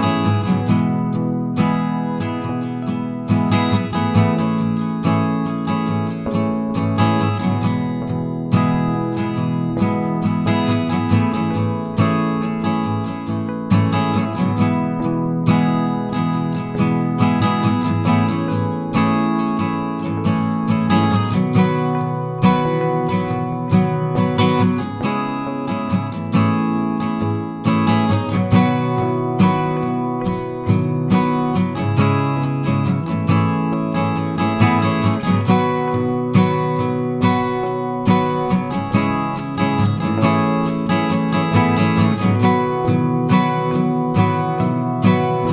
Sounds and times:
Music: 0:00.0 - 0:45.5.

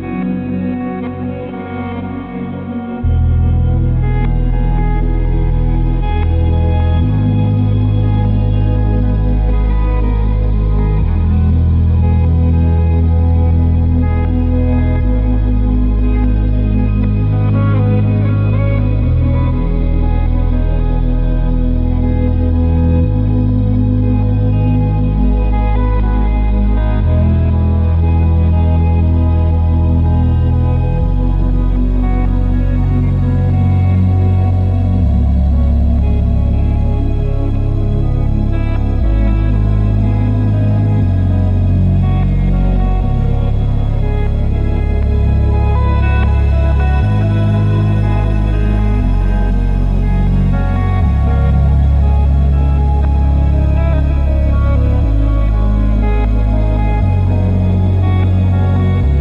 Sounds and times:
Ambient music: 0:00.0 - 0:59.2.

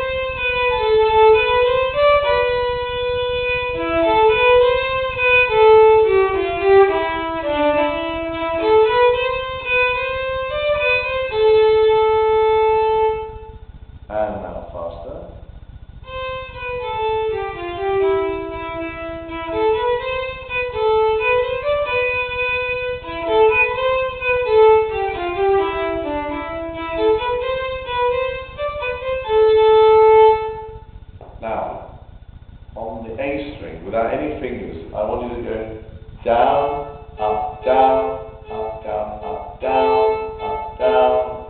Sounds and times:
Violin, fiddle: 0:00.0 - 0:13.6, 0:16.0 - 0:30.9, 0:35.0 - 0:41.4
Speech: 0:14.1 - 0:15.4, 0:31.4 - 0:31.9, 0:32.8 - 0:38.2, 0:38.8 - 0:40.0.

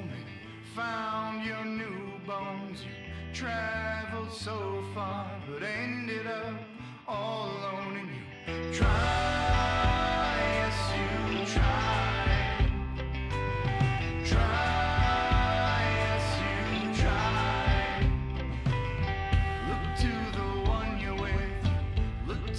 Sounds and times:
Music: 0:00.0 - 0:22.5.

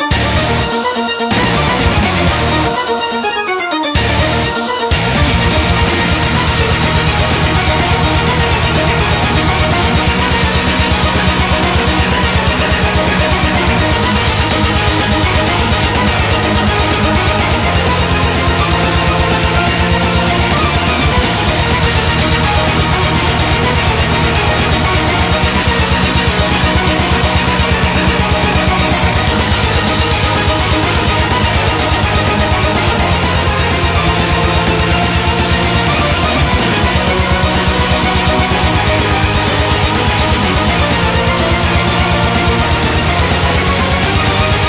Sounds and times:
Soundtrack music: 0:00.0 - 0:44.6.

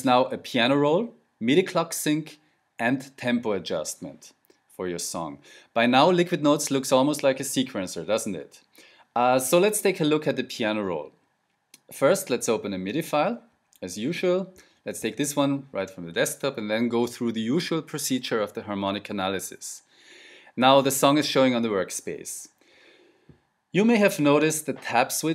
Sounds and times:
Speech: 0:00.0 - 0:11.2, 0:11.8 - 0:19.9, 0:20.6 - 0:22.6, 0:23.8 - 0:25.3.

